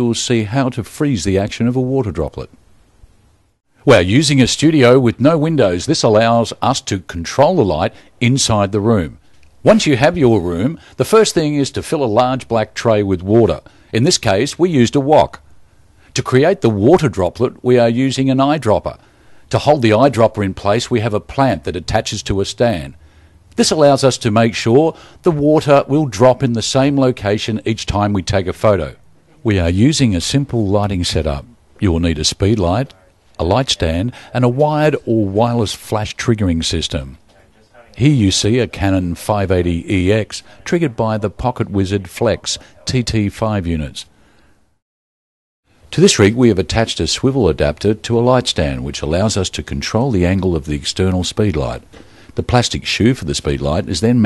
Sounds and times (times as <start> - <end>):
Speech: 0.0 - 2.6, 3.9 - 15.4, 16.2 - 23.0, 23.6 - 44.1, 45.9 - 54.2.